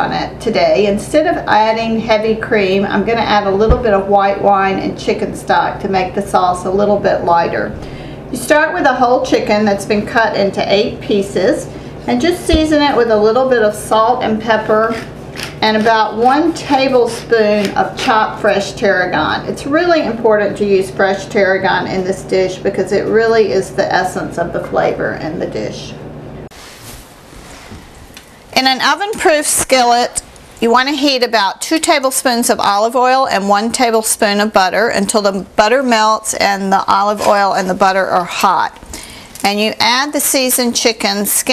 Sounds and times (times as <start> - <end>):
Speech: 0.0 - 7.8, 8.4 - 26.0, 28.6 - 38.8, 39.4 - 41.5.